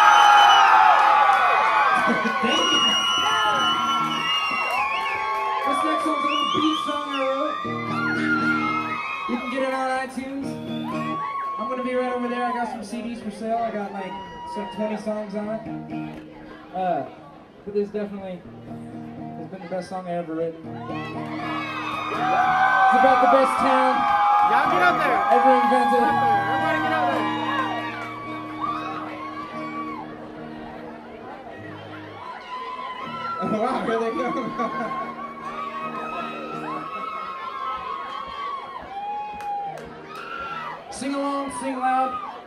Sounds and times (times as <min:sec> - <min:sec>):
Music: 0:02.6 - 0:04.7, 0:07.6 - 0:11.3, 0:15.0 - 0:16.4, 0:18.4 - 0:19.7, 0:20.5 - 0:37.1, 0:38.7 - 0:41.6.